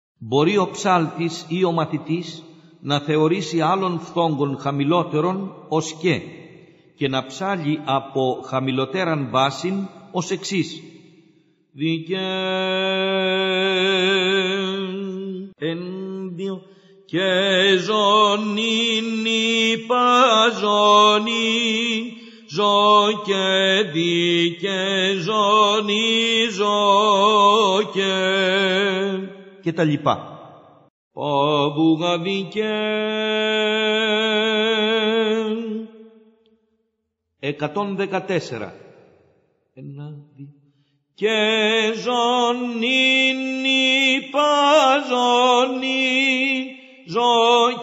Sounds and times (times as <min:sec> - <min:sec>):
Speech: 0:00.2 - 0:06.3, 0:07.0 - 0:10.8, 0:29.7 - 0:30.2, 0:37.4 - 0:38.8, 0:39.8 - 0:40.2.